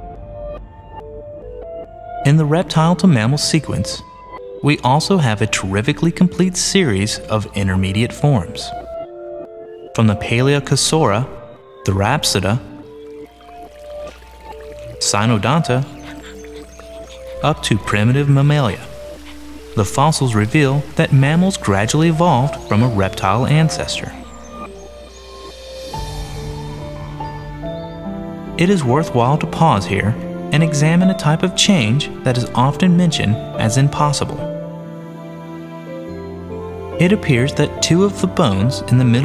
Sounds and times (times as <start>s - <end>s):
Music: 0.0s - 39.2s
Speech: 2.2s - 4.0s, 4.6s - 8.8s, 10.0s - 12.7s, 14.9s - 16.0s, 17.4s - 18.9s, 19.8s - 24.2s, 28.6s - 34.5s, 37.0s - 39.2s
Outside, rural or natural: 11.6s - 29.6s.